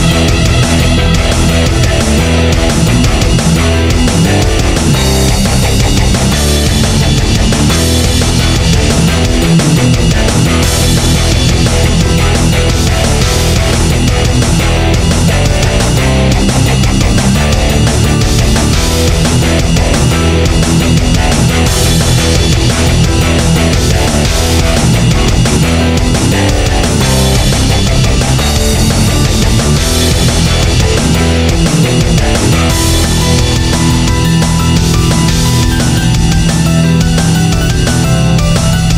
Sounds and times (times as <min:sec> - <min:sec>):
Soundtrack music: 0:00.0 - 0:38.9.